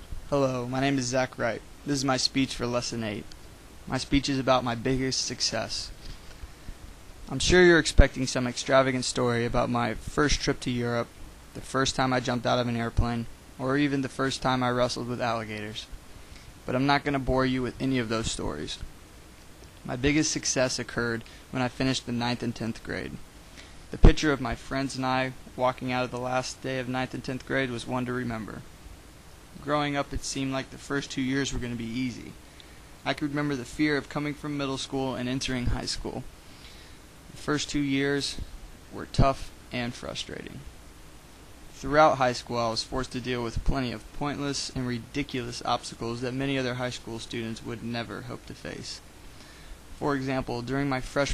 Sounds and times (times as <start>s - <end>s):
Male speech, man speaking: 0.3s - 3.3s, 3.9s - 5.9s, 7.3s - 15.9s, 16.7s - 18.8s, 19.9s - 23.2s, 24.0s - 28.6s, 29.6s - 32.4s, 33.1s - 36.3s, 37.4s - 40.7s, 41.8s - 49.0s, 50.0s - 51.3s.